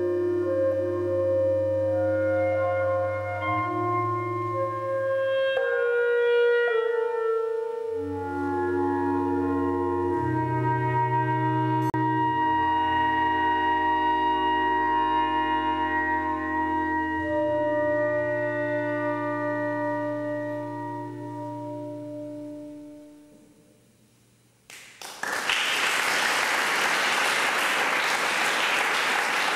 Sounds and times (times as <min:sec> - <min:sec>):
Clarinet: 0:00.0 - 0:23.8.